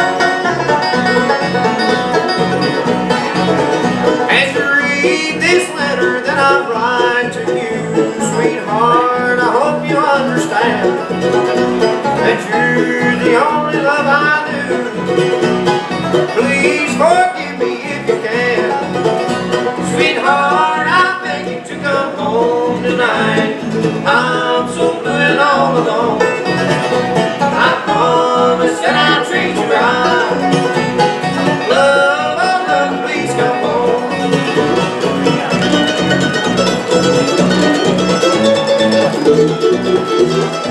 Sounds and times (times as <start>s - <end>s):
Music: 0.0s - 40.7s.